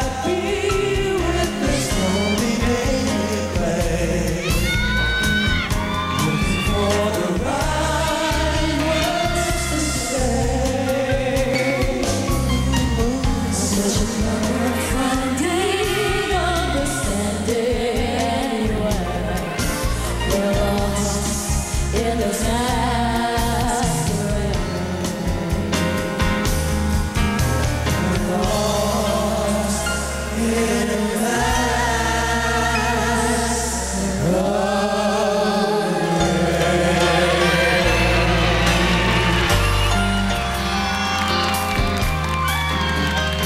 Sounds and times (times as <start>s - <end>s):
Music: 0.0s - 43.4s.